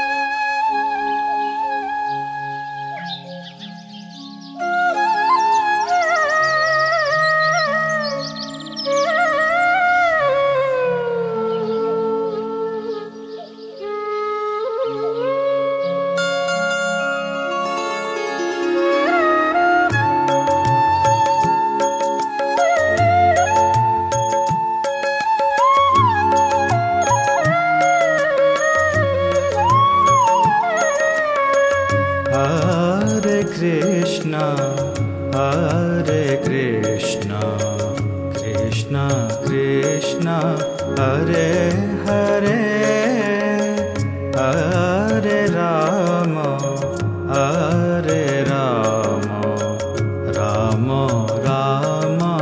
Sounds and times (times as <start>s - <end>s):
Music: 0.0s - 52.4s.